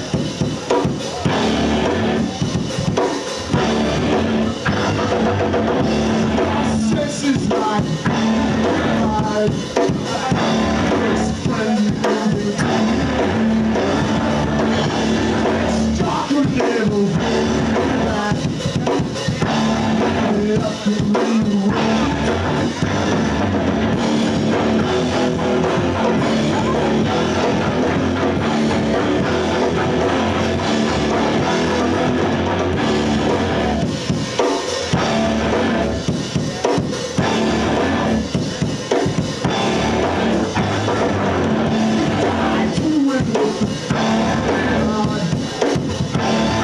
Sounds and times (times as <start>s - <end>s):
Bass drum: 0.0s - 46.6s
Drum kit: 0.0s - 46.6s.